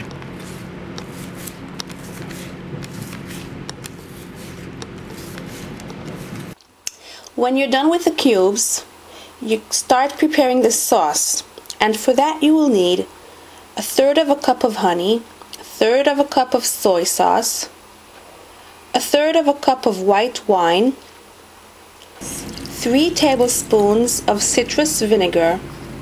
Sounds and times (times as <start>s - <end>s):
Speech: 7.3s - 13.1s, 13.8s - 17.8s, 18.9s - 21.0s, 22.2s - 25.7s.